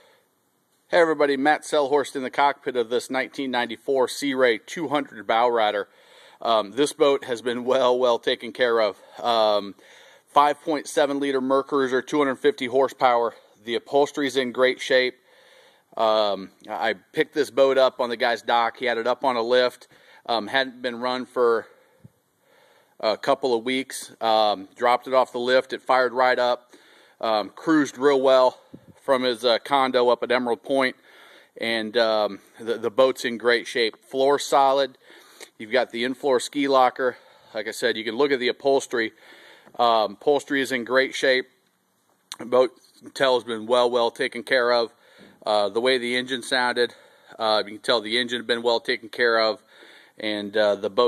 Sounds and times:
Speech: 0:00.9 - 0:15.2, 0:16.0 - 0:21.8, 0:23.0 - 0:31.0, 0:31.6 - 0:39.2, 0:39.8 - 0:41.6, 0:42.3 - 0:51.0.

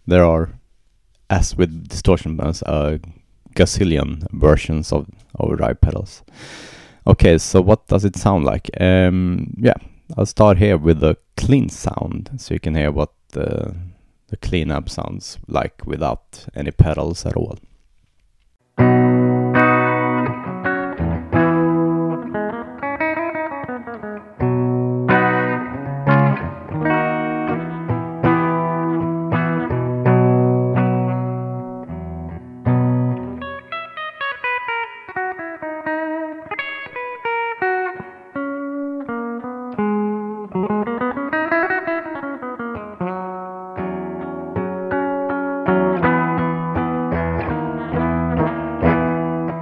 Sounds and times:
Speech: 0:00.0 - 0:00.6, 0:01.3 - 0:06.3, 0:07.0 - 0:17.7
Guitar: 0:00.0 - 0:49.6.

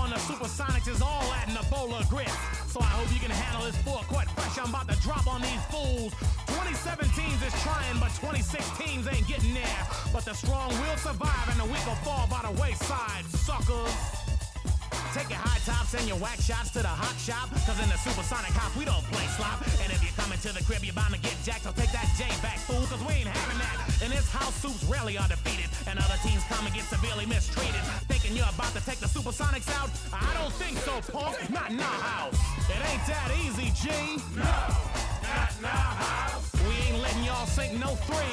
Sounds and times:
Music: 0:00.0 - 0:38.3.

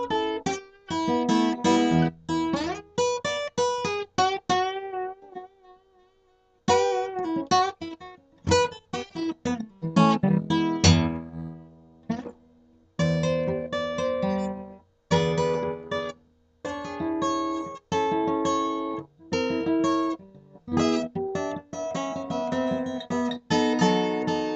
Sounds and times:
Acoustic guitar: 0:00.0 - 0:24.5
Inside, small room: 0:00.0 - 0:24.5.

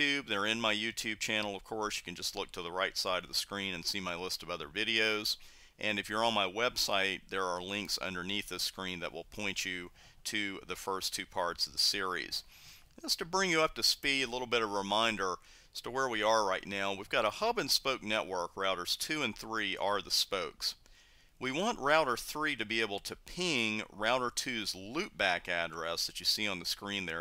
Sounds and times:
Speech: 0:00.0 - 0:20.8, 0:21.4 - 0:27.2.

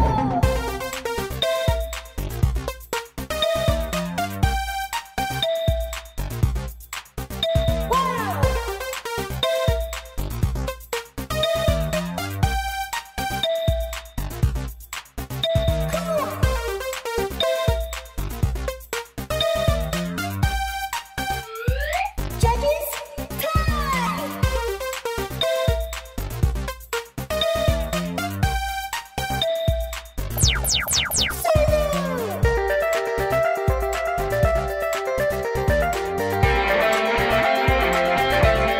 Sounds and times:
Music: 0:00.0 - 0:38.7.

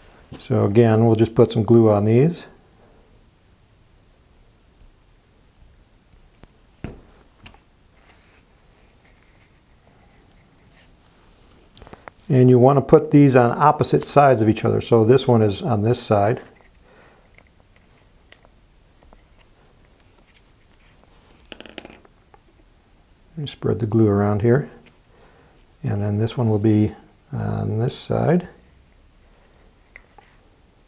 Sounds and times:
Inside, small room: 0:00.0 - 0:30.8
Speech: 0:00.4 - 0:02.6, 0:12.3 - 0:16.6, 0:23.3 - 0:24.8, 0:25.8 - 0:28.6.

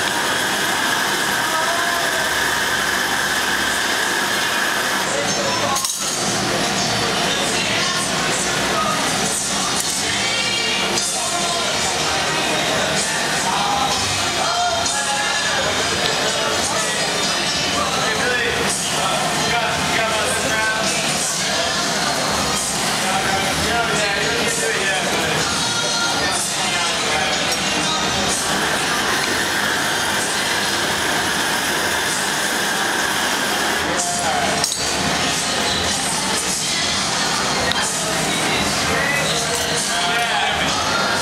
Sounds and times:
Music: 0:00.0 - 0:41.2
Speech: 0:00.1 - 0:03.4, 0:04.8 - 0:30.6, 0:33.7 - 0:41.2.

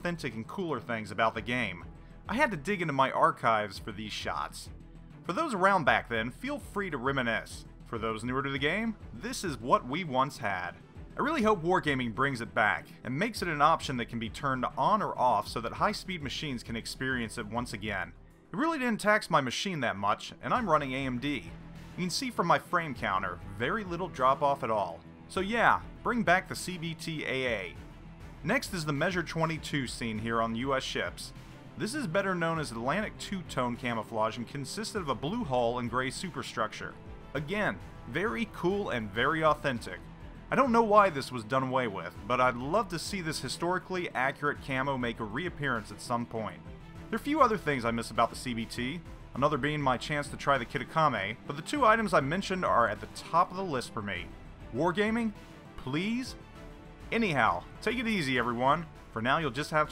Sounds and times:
Speech: 0:00.0 - 0:04.7, 0:05.3 - 0:27.8, 0:28.4 - 0:56.4, 0:57.1 - 0:59.9
Music: 0:00.0 - 0:59.9.

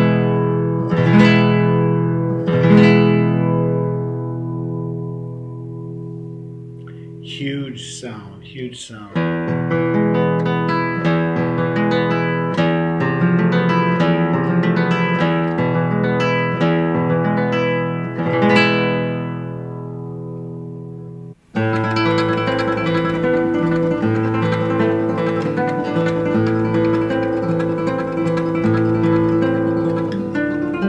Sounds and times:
Acoustic guitar: 0:00.0 - 0:30.8.

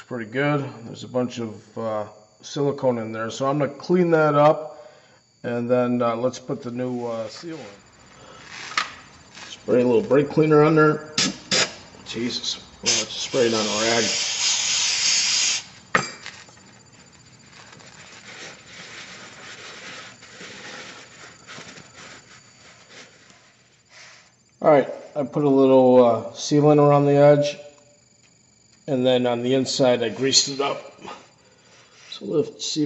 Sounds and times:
Speech: 0:00.0 - 0:04.6, 0:05.5 - 0:07.8, 0:09.5 - 0:11.1, 0:12.1 - 0:14.2, 0:24.6 - 0:27.6, 0:28.9 - 0:31.0, 0:32.1 - 0:32.8.

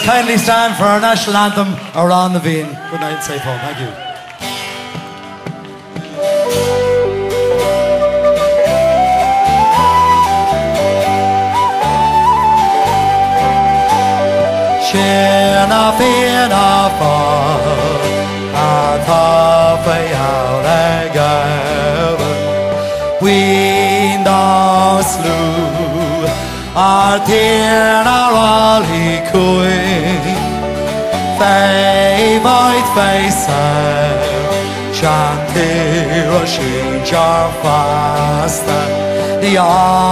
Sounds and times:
Music: 0:00.0 - 0:40.1.

